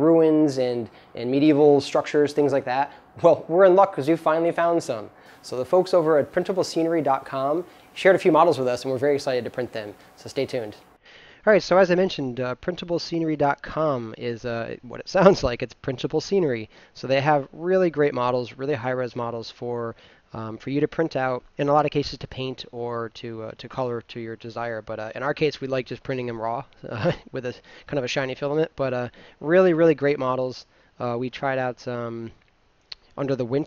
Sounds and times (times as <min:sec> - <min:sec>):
Speech: 0:00.0 - 0:32.4, 0:33.2 - 0:33.6.